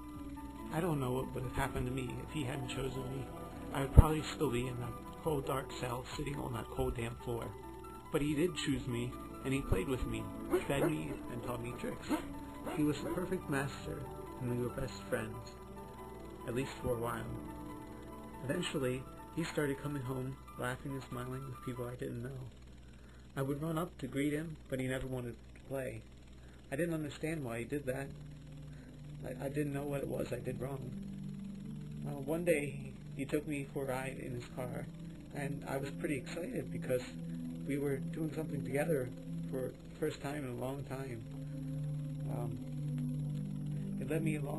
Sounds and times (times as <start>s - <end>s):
Music: 0.0s - 44.5s
Speech: 0.7s - 15.6s, 16.5s - 17.4s, 18.4s - 22.5s, 23.4s - 26.1s, 26.7s - 28.2s, 29.2s - 31.0s, 32.0s - 41.2s, 42.3s - 42.6s, 44.0s - 44.5s.